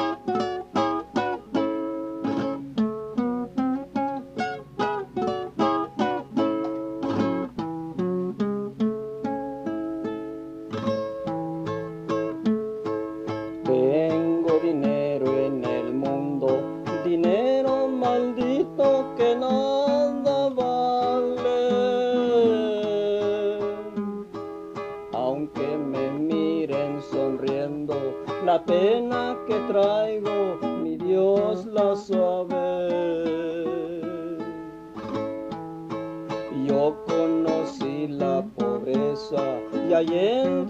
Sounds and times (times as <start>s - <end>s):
Guitar: 0.0s - 40.7s.